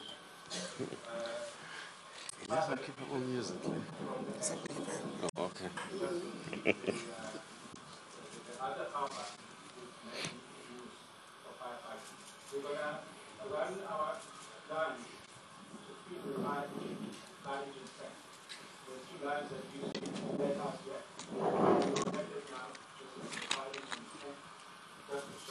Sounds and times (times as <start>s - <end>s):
Speech: 2.4s - 6.3s, 8.2s - 18.2s, 18.9s - 21.2s, 21.8s - 24.5s, 25.1s - 25.5s.